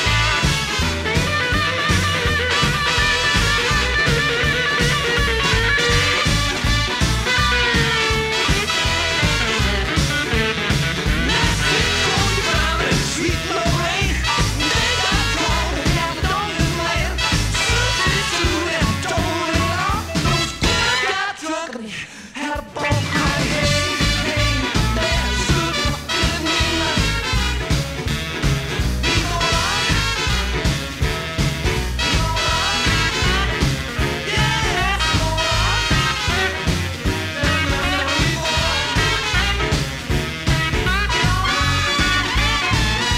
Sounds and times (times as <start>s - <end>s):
Swing music: 0.0s - 21.7s, 22.4s - 43.1s.